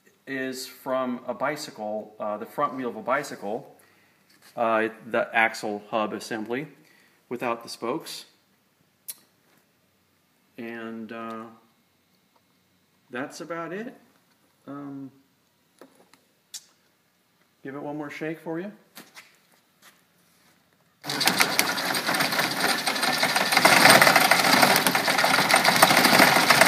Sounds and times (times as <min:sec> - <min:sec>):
Speech: 0:00.2 - 0:03.7, 0:04.6 - 0:08.4, 0:10.6 - 0:11.6, 0:13.1 - 0:15.2, 0:17.6 - 0:18.9.